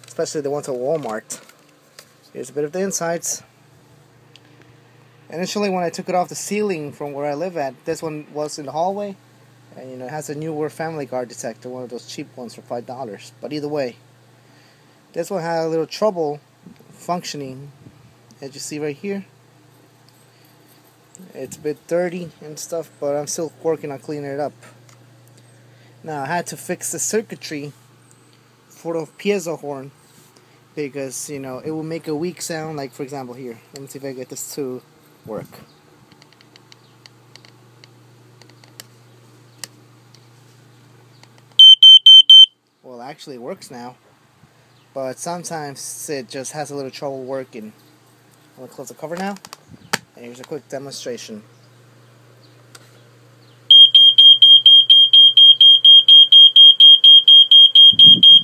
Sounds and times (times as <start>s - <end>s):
Speech: 0.1s - 1.4s, 2.3s - 3.5s, 5.3s - 14.0s, 15.2s - 16.4s, 17.0s - 17.8s, 18.4s - 19.3s, 21.2s - 24.7s, 26.0s - 27.8s, 28.7s - 30.0s, 30.8s - 35.7s, 42.8s - 44.0s, 45.0s - 47.8s, 48.6s - 49.4s, 50.2s - 51.5s
Smoke detector, smoke alarm: 41.6s - 42.6s, 53.7s - 58.4s.